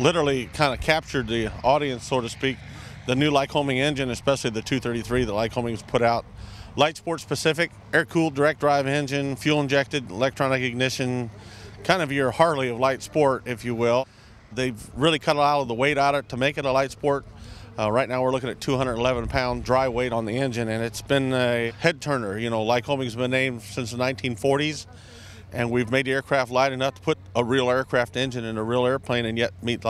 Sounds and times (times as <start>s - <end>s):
Speech: 0.0s - 29.8s.